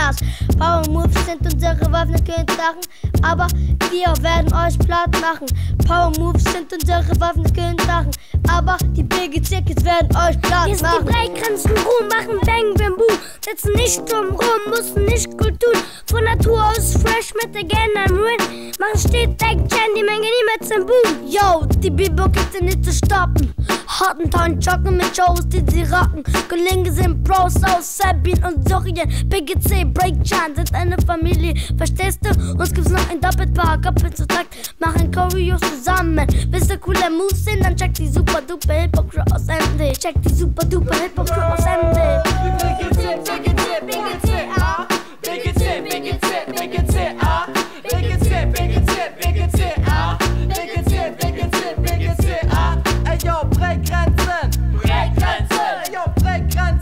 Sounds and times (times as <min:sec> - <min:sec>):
Music: 0:00.0 - 0:56.8.